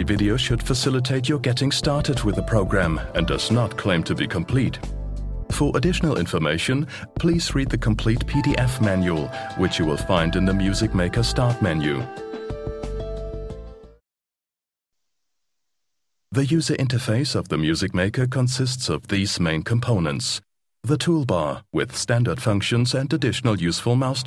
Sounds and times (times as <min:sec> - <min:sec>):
Speech: 0:00.0 - 0:04.9, 0:05.5 - 0:12.1, 0:16.3 - 0:24.2
Music: 0:00.0 - 0:14.0.